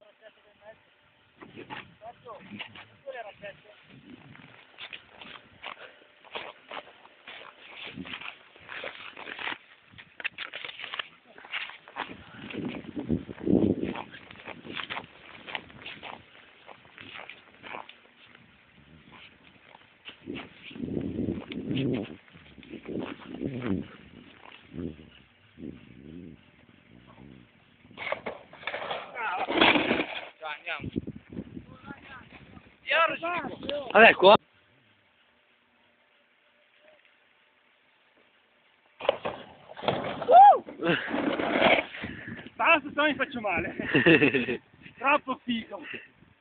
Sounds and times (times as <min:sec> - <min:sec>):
Speech: 0:00.0 - 0:00.8, 0:02.0 - 0:03.8, 0:31.7 - 0:34.4, 0:42.6 - 0:43.8, 0:45.0 - 0:46.0.